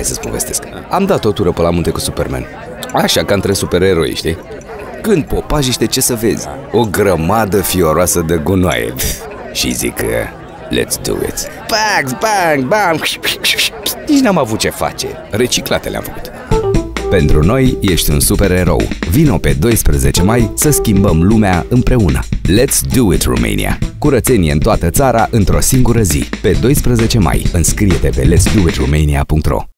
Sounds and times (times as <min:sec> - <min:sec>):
Speech: 0:00.0 - 0:29.7
Music: 0:16.5 - 0:29.0.